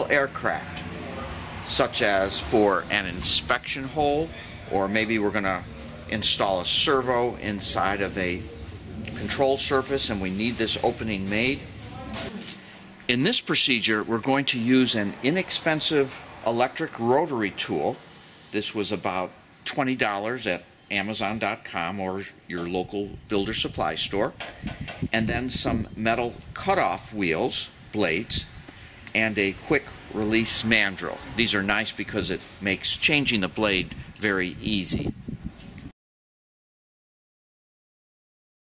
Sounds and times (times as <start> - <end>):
Speech: 0.0 - 18.0, 18.6 - 24.4, 25.1 - 28.5, 29.1 - 35.2.